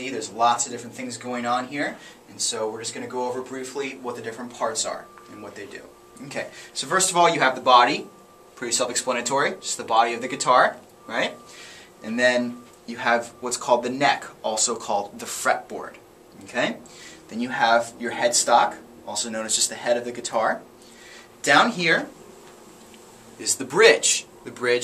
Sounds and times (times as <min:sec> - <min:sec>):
Speech: 0:00.0 - 0:11.4, 0:12.0 - 0:20.6, 0:21.4 - 0:22.2, 0:23.4 - 0:24.8.